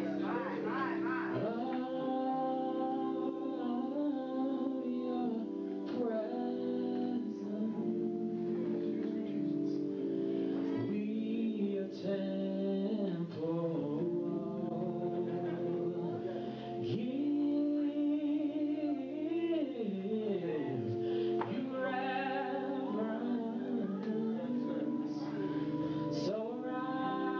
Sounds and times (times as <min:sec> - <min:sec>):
Male singing: 0:00.0 - 0:27.4
Music: 0:00.0 - 0:27.4.